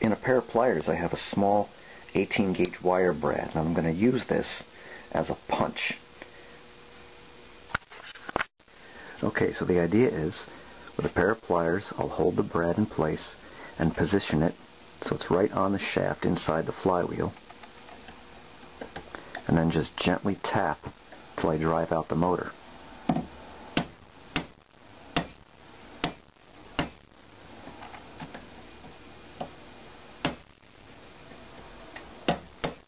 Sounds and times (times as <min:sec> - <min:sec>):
Speech: 0:00.0 - 0:06.0, 0:09.2 - 0:17.4, 0:19.4 - 0:22.6.